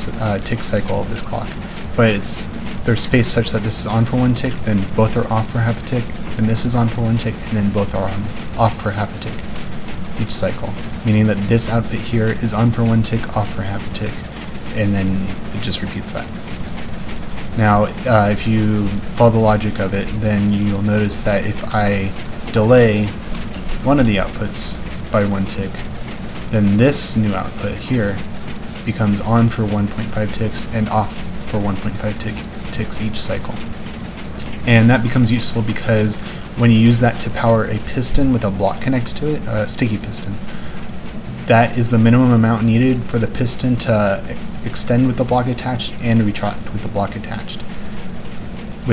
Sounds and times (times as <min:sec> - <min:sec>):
Speech: 0:00.0 - 0:09.5, 0:10.2 - 0:16.4, 0:17.5 - 0:25.9, 0:26.5 - 0:33.7, 0:34.4 - 0:40.5, 0:41.4 - 0:47.8.